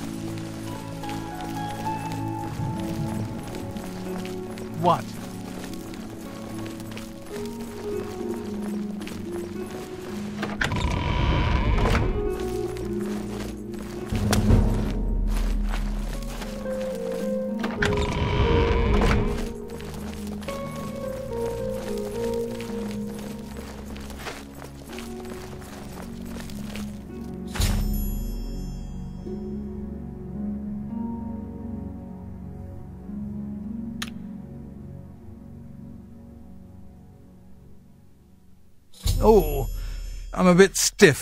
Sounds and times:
Music: 0.0s - 41.2s.

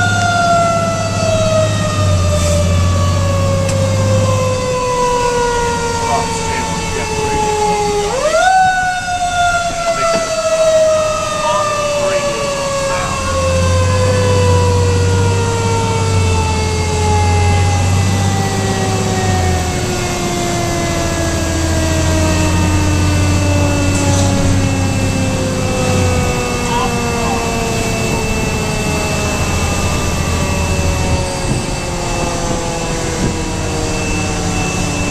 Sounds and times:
Fire engine, fire truck (siren): 0.0s - 35.1s
Speech: 11.4s - 13.3s, 26.7s - 28.3s.

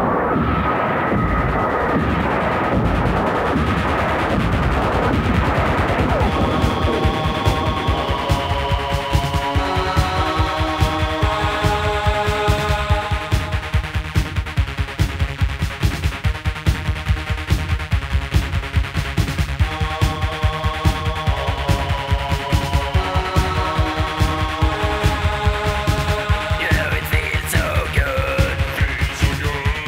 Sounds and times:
Music: 0.0s - 29.8s.

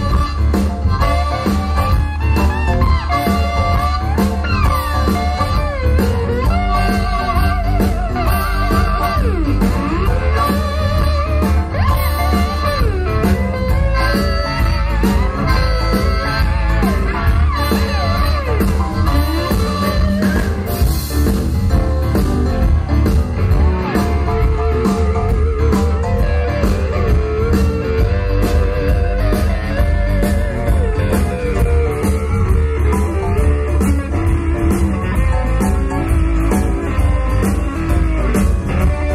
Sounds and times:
Blues: 0.0s - 39.1s
Guitar: 0.0s - 39.1s
Rock and roll: 0.0s - 39.1s.

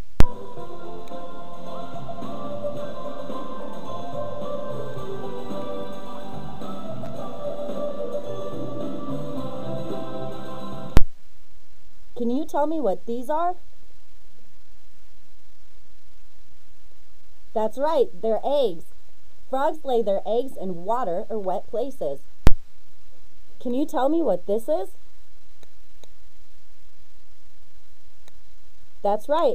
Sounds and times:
Music: 0.2s - 11.0s
Speech: 12.2s - 13.6s, 17.6s - 18.9s, 19.5s - 22.2s, 23.6s - 25.0s, 29.0s - 29.5s.

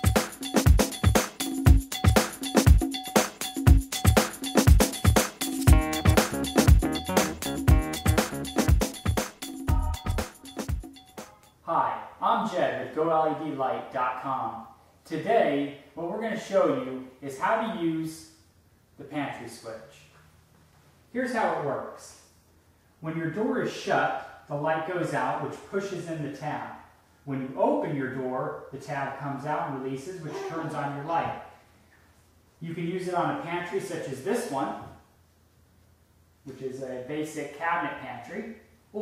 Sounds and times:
Speech: 11.7s - 18.4s, 19.0s - 20.2s, 21.1s - 22.3s, 23.0s - 31.5s, 32.6s - 35.0s, 36.5s - 39.0s.

